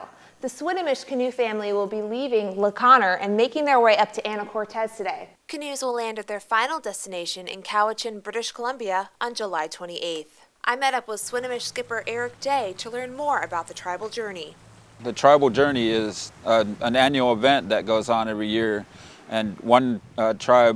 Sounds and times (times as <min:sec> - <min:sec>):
Speech: 0:00.5 - 0:20.7.